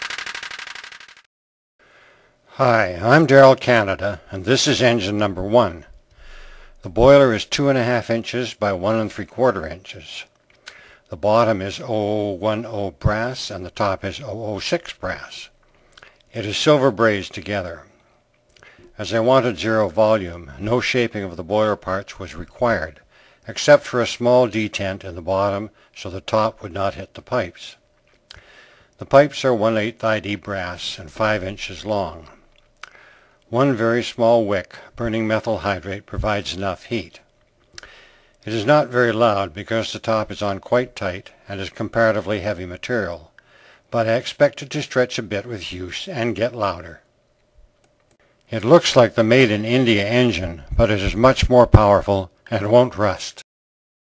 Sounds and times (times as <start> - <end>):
Speech: 2.5 - 5.9, 6.8 - 10.3, 11.1 - 15.5, 16.3 - 17.9, 19.0 - 27.8, 29.0 - 32.4, 33.5 - 37.3, 38.4 - 43.3, 43.9 - 47.1, 48.5 - 53.4.